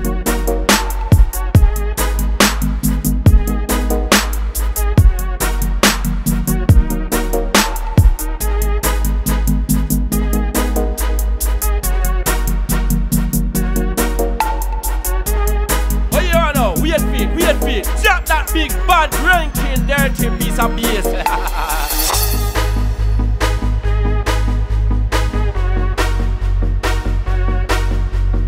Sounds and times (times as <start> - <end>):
Dubstep: 0.1 - 23.7.